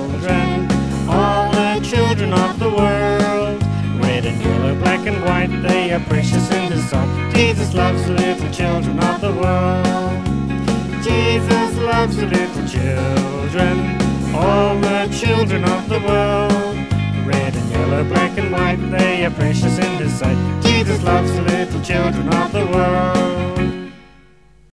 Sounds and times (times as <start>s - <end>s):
Music: 0.0s - 24.7s.